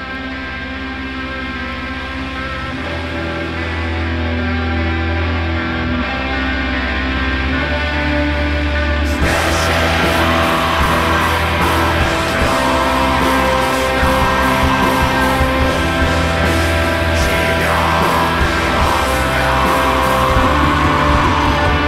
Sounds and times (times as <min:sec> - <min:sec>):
Mantra: 0:17.0 - 0:21.8.